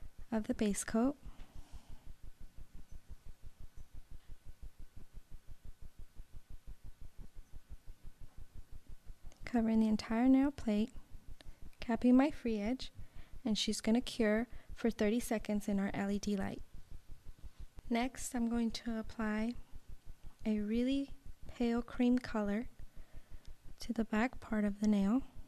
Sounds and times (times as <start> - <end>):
Speech: 0.3 - 1.2, 9.4 - 10.9, 11.8 - 16.6, 17.9 - 19.6, 20.4 - 22.7, 23.8 - 25.3.